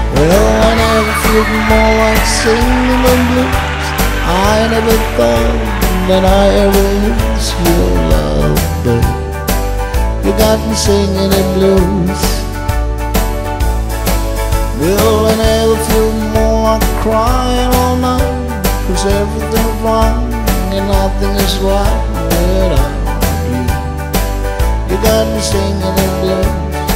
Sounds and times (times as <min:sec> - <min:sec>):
Male singing: 0:00.0 - 0:09.2, 0:10.2 - 0:12.5, 0:14.8 - 0:23.8, 0:24.9 - 0:26.9
Blues: 0:00.0 - 0:26.9.